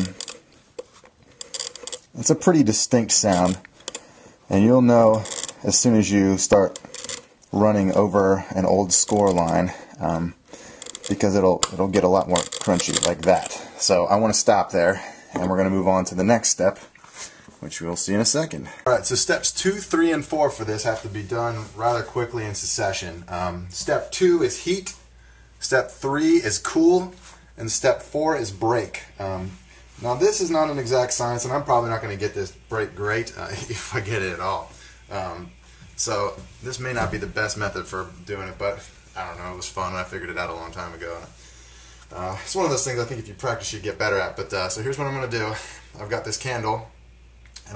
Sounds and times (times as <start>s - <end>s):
Speech: 2.2s - 3.6s, 4.5s - 6.8s, 7.5s - 10.4s, 11.0s - 16.9s, 17.6s - 25.0s, 25.6s - 41.4s, 42.1s - 47.0s.